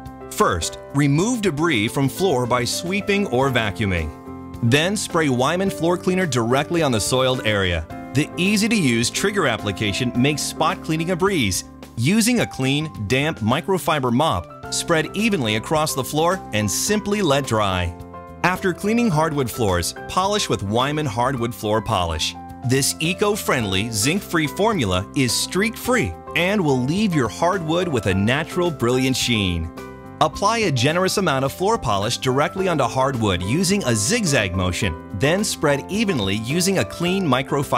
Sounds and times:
Music: 0:00.0 - 0:37.7
Speech: 0:00.3 - 0:37.7.

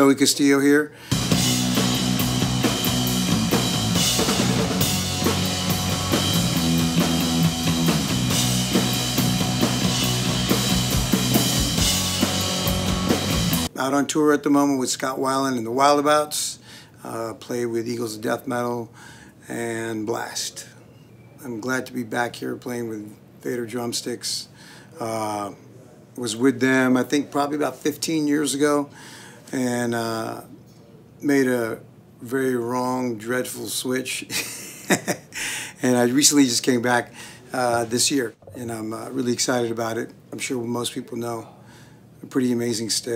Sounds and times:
Speech: 0:00.0 - 0:00.9, 0:13.7 - 0:20.8, 0:21.4 - 0:28.9, 0:29.5 - 0:34.3, 0:35.8 - 0:41.6, 0:42.2 - 0:43.1.

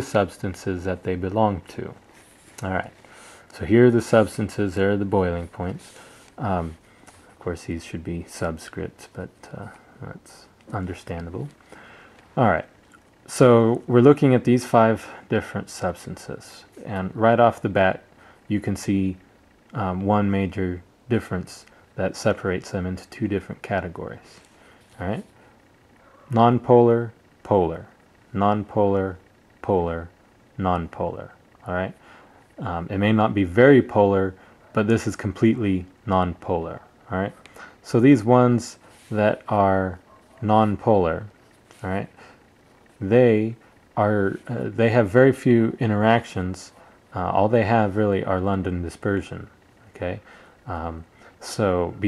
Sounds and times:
Speech: 0:00.0 - 0:02.0, 0:02.6 - 0:06.8, 0:07.4 - 0:11.6, 0:12.4 - 0:25.3, 0:26.3 - 0:32.0, 0:32.6 - 0:42.4, 0:43.0 - 0:52.0.

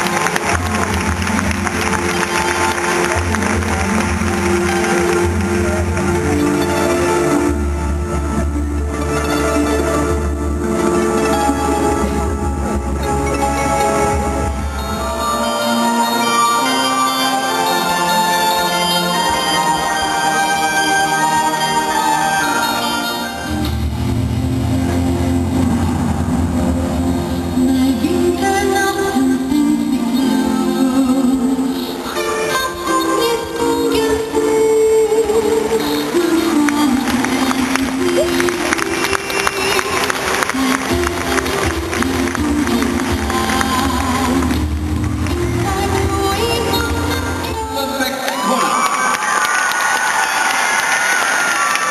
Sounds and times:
Music: 0:00.0 - 0:51.9.

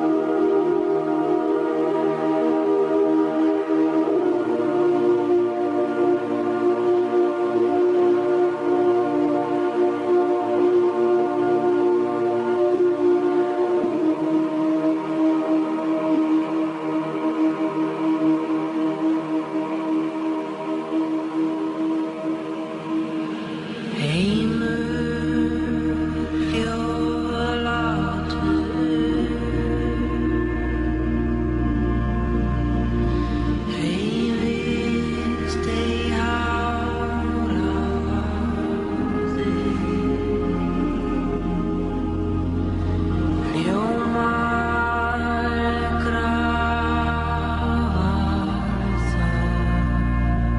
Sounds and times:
Music: 0:00.0 - 0:50.5.

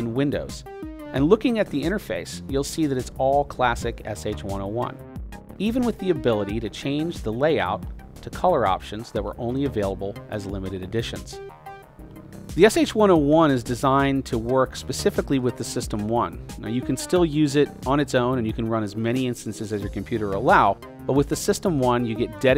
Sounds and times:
Speech: 0:00.0 - 0:05.0, 0:05.6 - 0:11.4, 0:12.6 - 0:22.5
Music: 0:00.0 - 0:22.5.

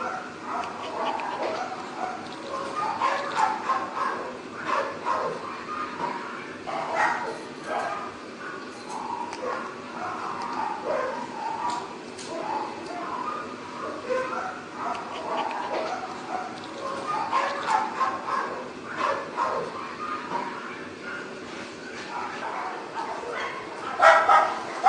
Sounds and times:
Bow-wow: 0:00.0 - 0:08.1, 0:09.0 - 0:20.6, 0:22.1 - 0:24.8
Yip: 0:00.0 - 0:08.1, 0:08.9 - 0:21.3, 0:22.2 - 0:24.8.

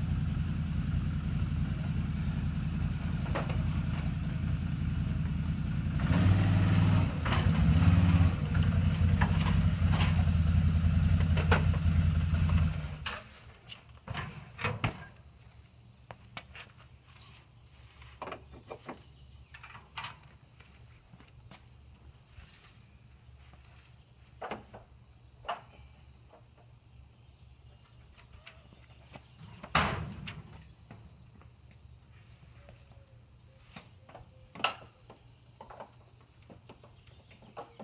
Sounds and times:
Mechanisms: 0:00.0 - 0:37.8.

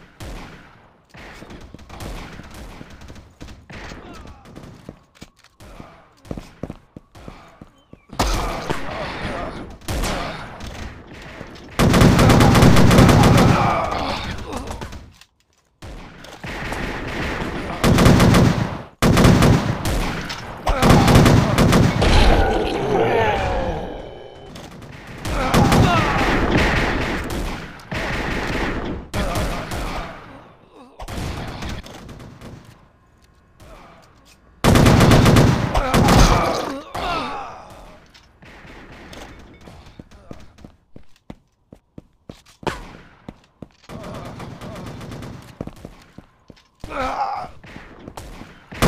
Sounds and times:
Fusillade: 0:09.9 - 0:15.1, 0:15.8 - 0:22.5, 0:24.5 - 0:30.3, 0:34.6 - 0:36.6, 0:43.9 - 0:45.7, 0:47.7 - 0:48.8.

